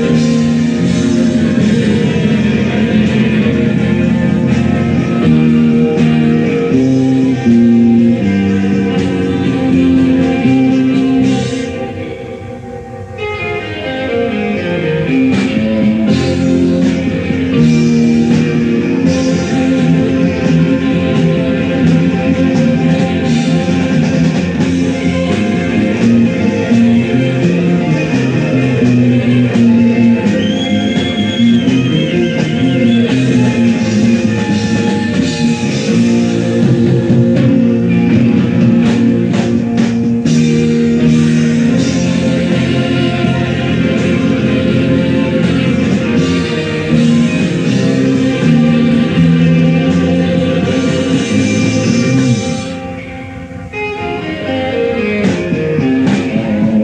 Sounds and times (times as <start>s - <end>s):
Rock and roll: 0.0s - 56.8s.